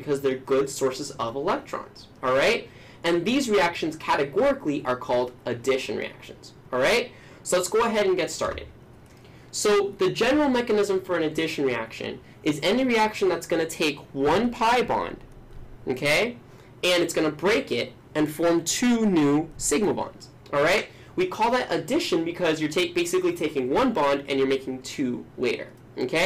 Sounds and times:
Speech: 0.0 - 8.8, 9.5 - 26.2.

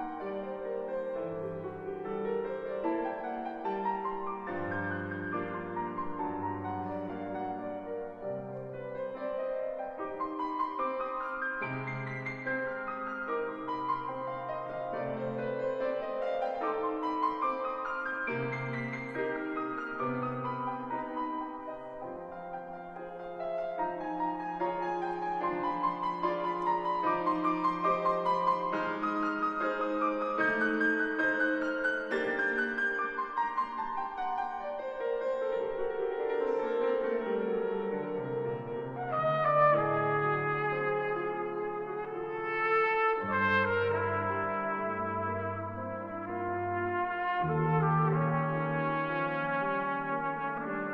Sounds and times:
Music: 0.0 - 50.9.

